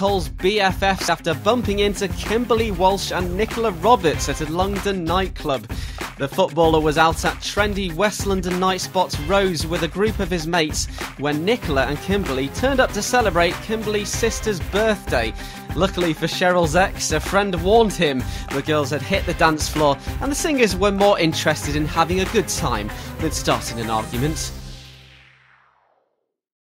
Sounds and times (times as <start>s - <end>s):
Speech: 0.0s - 24.5s
Music: 0.0s - 26.1s.